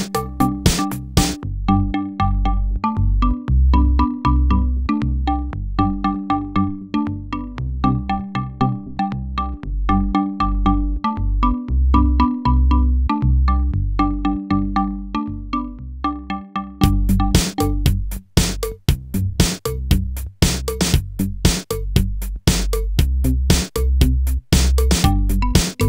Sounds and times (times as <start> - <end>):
Drum machine: 0.0 - 1.4, 16.8 - 25.8.